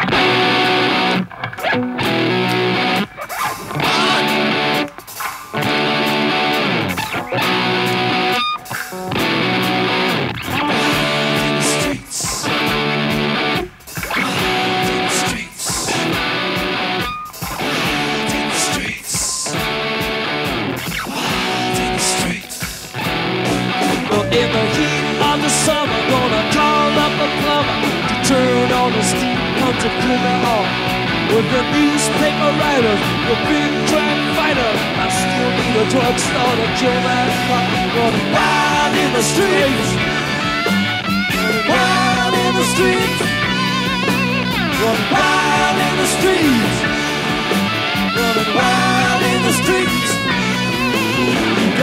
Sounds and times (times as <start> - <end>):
Music: 0.0 - 51.8.